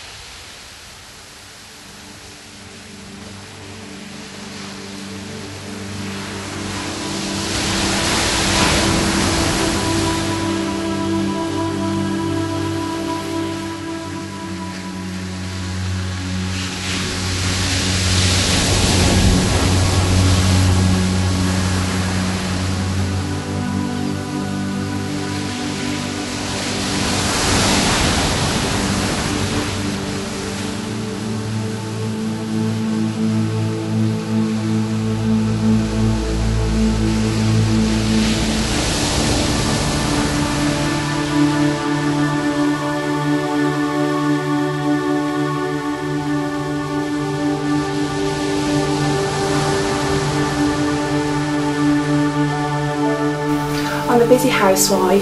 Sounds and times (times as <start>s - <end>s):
Music: 1.4s - 55.2s.